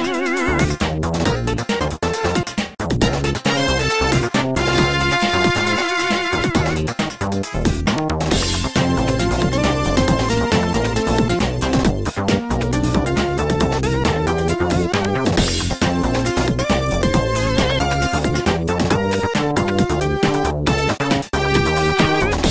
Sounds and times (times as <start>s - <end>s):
Music: 0.0s - 22.5s.